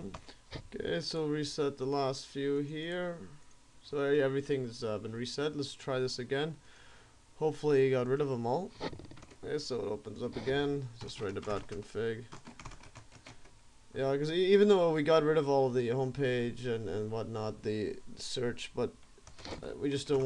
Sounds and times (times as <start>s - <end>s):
Speech: 0.0s - 6.6s, 7.4s - 8.8s, 9.4s - 12.4s, 14.0s - 19.0s, 19.6s - 20.2s.